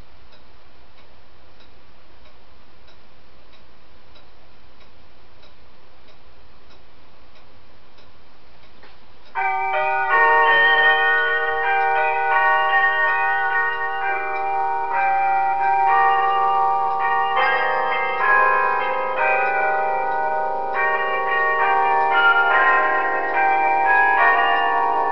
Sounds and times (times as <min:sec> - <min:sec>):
Bell: 0:09.4 - 0:25.1
Christmas music: 0:09.4 - 0:25.1.